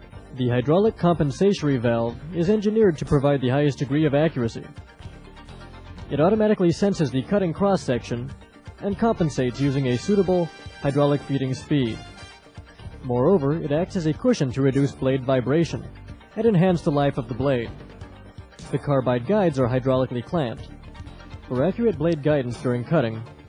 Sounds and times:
Music: 0.0s - 23.4s
Speech: 0.4s - 4.7s, 6.1s - 12.0s, 13.1s - 17.7s, 18.6s - 20.7s, 21.5s - 23.3s.

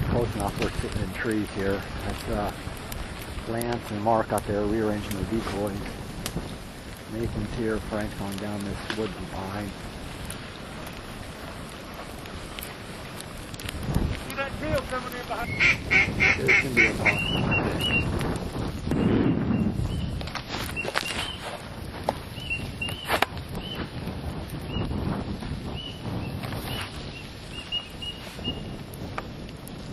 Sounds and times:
Speech: 0.0s - 2.6s, 3.4s - 5.9s, 7.1s - 9.8s, 14.3s - 15.5s, 16.4s - 17.2s.

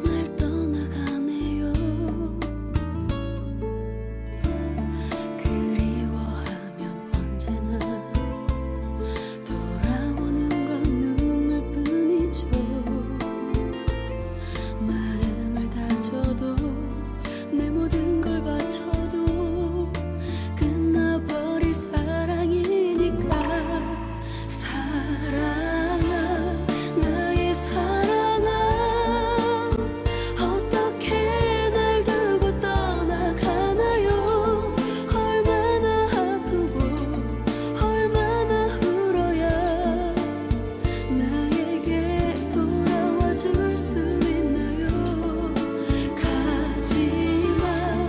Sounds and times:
Music: 0.0s - 48.0s.

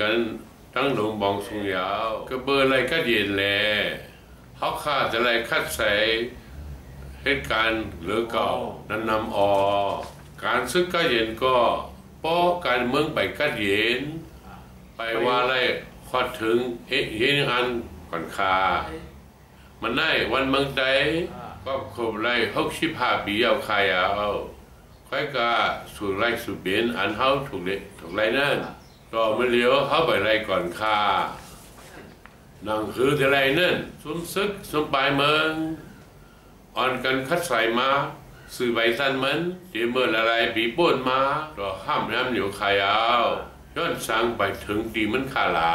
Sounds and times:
Male speech, man speaking: 0.0s - 6.4s, 7.2s - 19.2s, 19.8s - 31.6s, 32.6s - 36.0s, 36.8s - 45.7s
Narration, monologue: 0.0s - 45.7s.

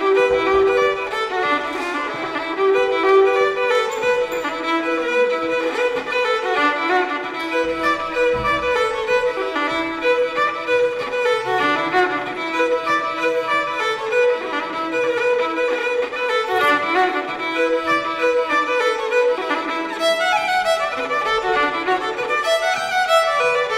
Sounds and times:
Violin, fiddle: 0.0s - 23.7s.

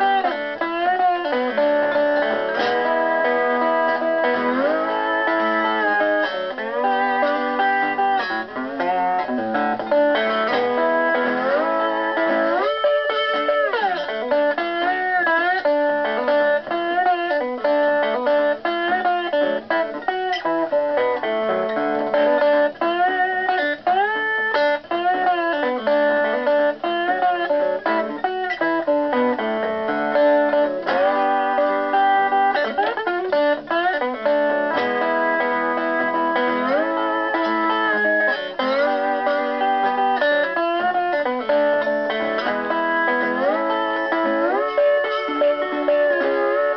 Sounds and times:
Acoustic guitar: 0.0s - 46.7s
Blues: 0.0s - 46.7s.

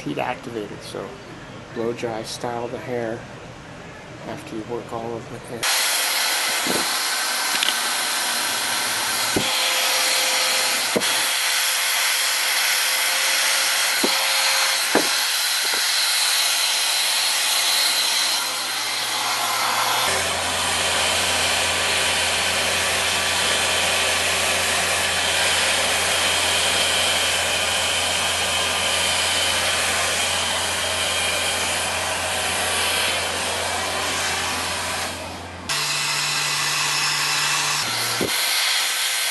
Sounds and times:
Hair dryer: 5.6s - 39.3s.

